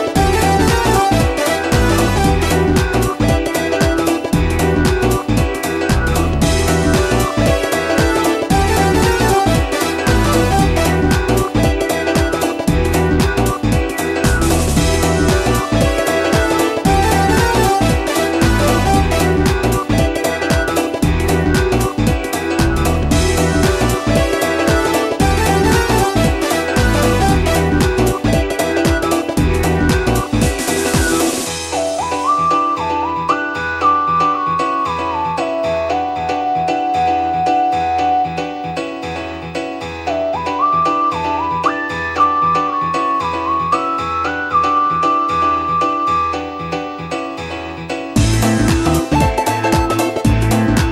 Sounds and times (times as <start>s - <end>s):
Music: 0.0s - 50.9s.